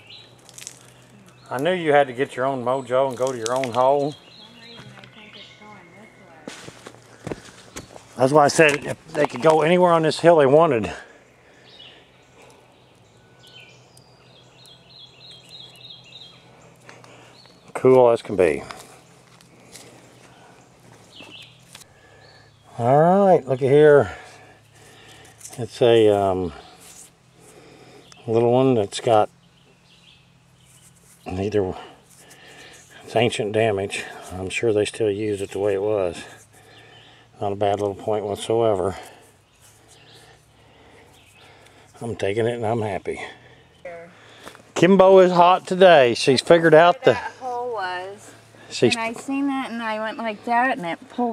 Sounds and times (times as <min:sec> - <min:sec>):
Environmental noise: 0:00.0 - 0:51.3.